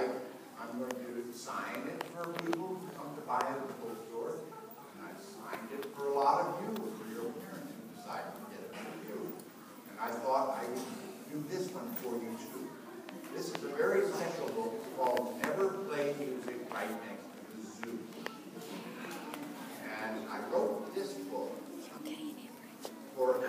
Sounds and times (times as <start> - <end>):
Speech: 0.0 - 18.9, 23.2 - 23.4.